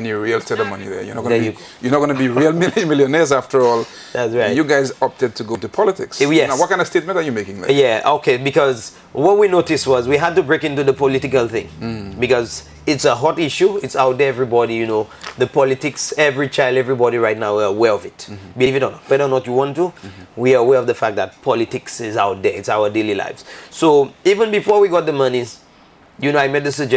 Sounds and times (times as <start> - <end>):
Speech: 0.0 - 25.6, 26.2 - 26.9
Inside, small room: 0.0 - 26.9.